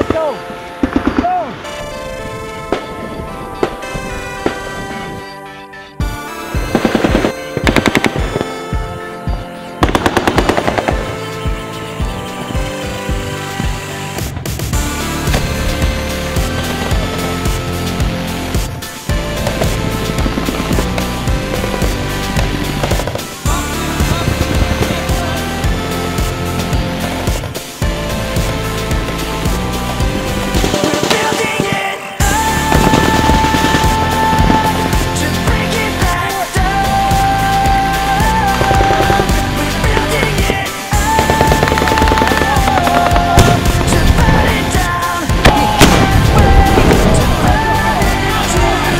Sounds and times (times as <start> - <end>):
Music: 0.0 - 48.9.